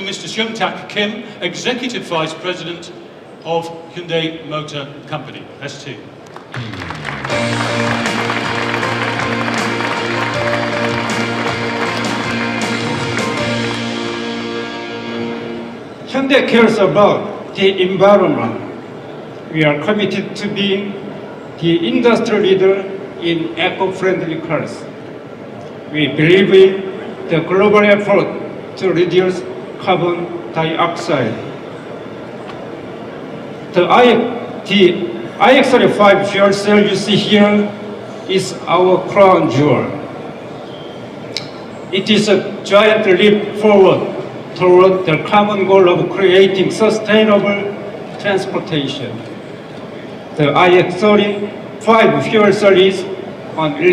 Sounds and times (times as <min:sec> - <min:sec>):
Speech: 0:00.0 - 0:06.1, 0:16.1 - 0:18.7, 0:19.5 - 0:21.0, 0:21.6 - 0:24.9, 0:25.9 - 0:31.5, 0:33.8 - 0:40.0, 0:41.9 - 0:49.2, 0:50.4 - 0:53.9.